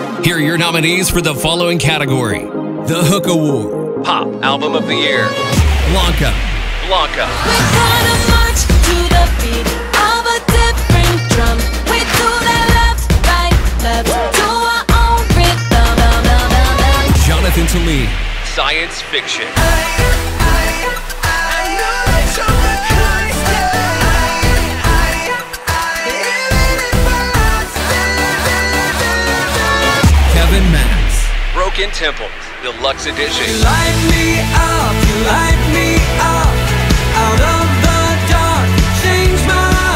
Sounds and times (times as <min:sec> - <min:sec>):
Soundtrack music: 0:00.0 - 0:39.9
Speech: 0:00.2 - 0:07.5, 0:17.1 - 0:19.6, 0:30.2 - 0:33.8.